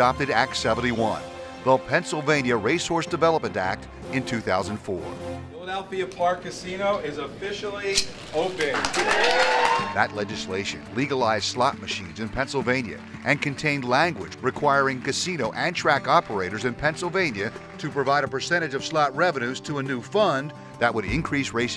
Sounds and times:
Music: 0.0 - 5.7, 8.6 - 21.7
Speech: 0.0 - 8.9, 9.9 - 21.7.

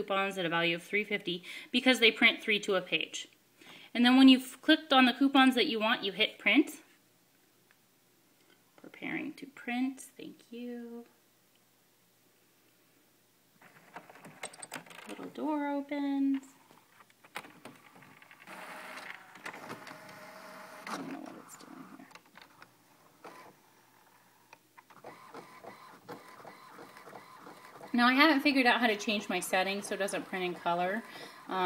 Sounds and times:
Speech: 0.0 - 3.3, 4.0 - 6.9, 8.8 - 11.2, 15.1 - 16.5, 21.0 - 22.0, 28.0 - 31.6
Printer: 17.7 - 21.9, 23.2 - 24.2, 24.9 - 31.6.

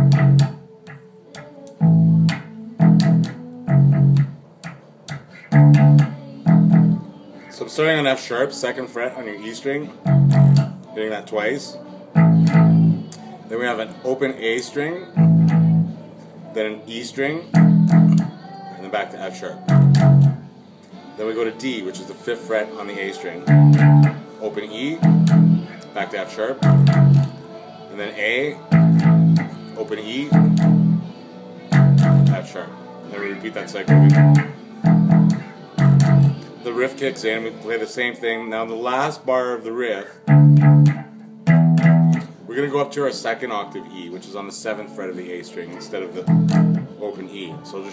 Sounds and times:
Electric guitar: 0.0 - 7.0, 10.0 - 11.0, 12.2 - 13.4, 15.1 - 16.0, 17.5 - 18.4, 19.7 - 21.0, 23.3 - 27.5, 28.5 - 36.6, 40.2 - 42.5, 46.2 - 47.0
Speech: 7.5 - 10.0, 10.9 - 11.8, 13.5 - 15.1, 16.5 - 17.6, 18.8 - 19.6, 21.2 - 23.4, 24.4 - 25.0, 25.8 - 26.6, 27.9 - 28.6, 32.3 - 34.0, 36.6 - 40.2, 42.5 - 46.3, 46.9 - 47.9.

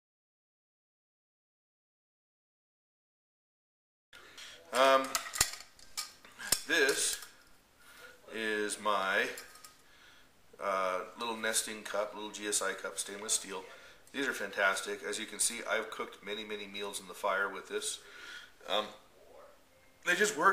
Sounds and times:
Inside, small room: 4.1 - 20.5
Speech: 4.6 - 5.2, 6.6 - 7.2, 8.1 - 9.5, 10.6 - 18.0, 18.6 - 20.5.

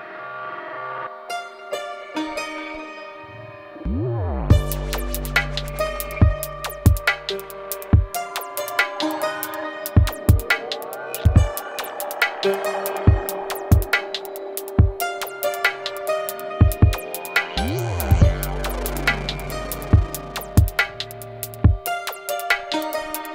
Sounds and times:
Electronica: 0.0 - 23.3.

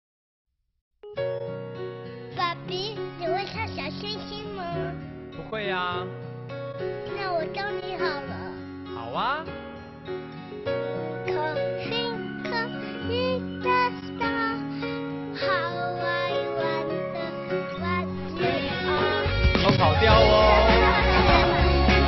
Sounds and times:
Music: 1.0 - 22.0
Child speech, kid speaking: 2.4 - 5.0, 7.0 - 8.6, 11.2 - 14.7, 15.4 - 19.2.

